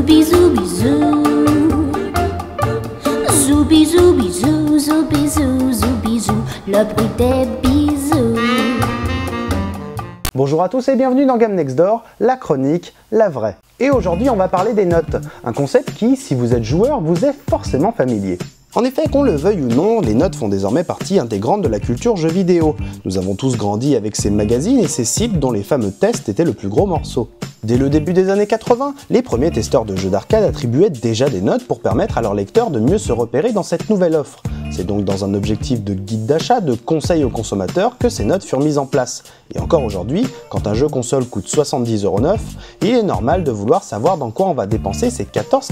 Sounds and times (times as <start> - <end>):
Speech: 10.3 - 45.7.